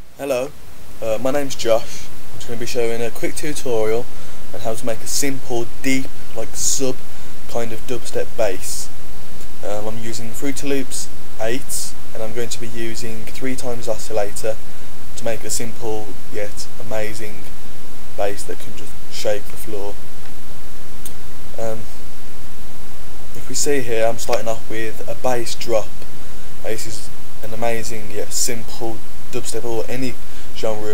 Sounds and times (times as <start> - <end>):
Speech: 0.2 - 8.9, 9.6 - 14.6, 15.2 - 17.5, 18.2 - 20.0, 21.6 - 22.0, 23.4 - 26.0, 26.6 - 30.9.